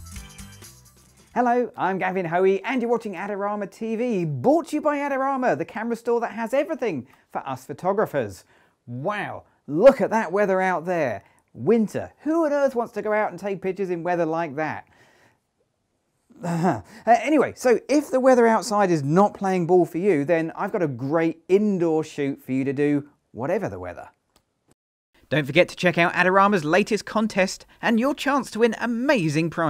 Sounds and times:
Speech: 0:01.4 - 0:14.9, 0:16.4 - 0:24.2, 0:25.3 - 0:29.6.

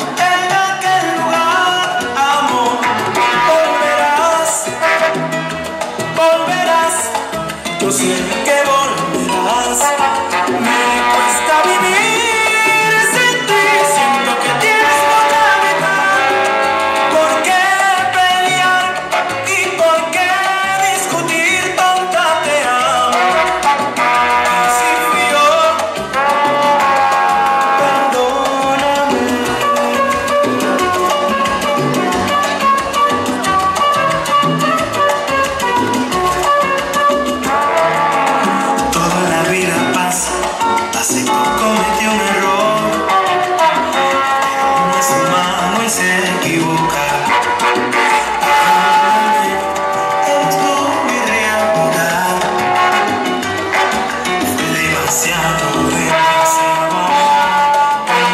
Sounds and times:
Salsa music: 0:00.0 - 0:58.3.

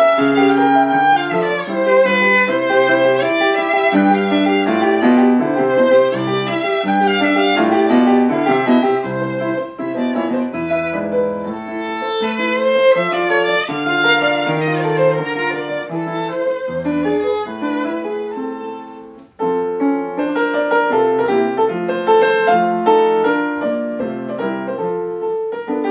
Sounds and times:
Violin, fiddle: 0:00.0 - 0:19.3.

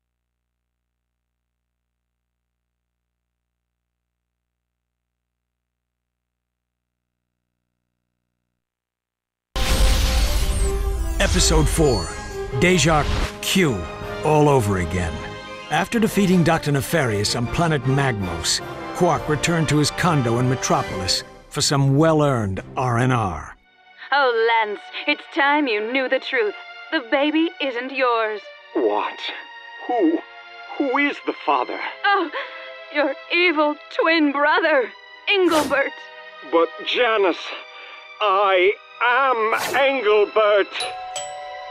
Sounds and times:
Music: 0:09.6 - 0:41.7
Speech: 0:11.2 - 0:23.6, 0:38.2 - 0:40.8.

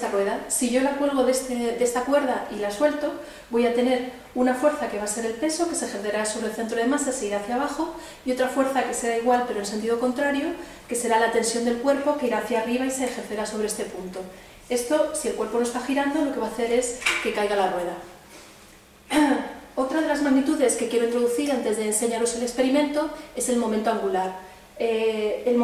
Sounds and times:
Speech: 0:00.0 - 0:18.1, 0:19.1 - 0:25.6.

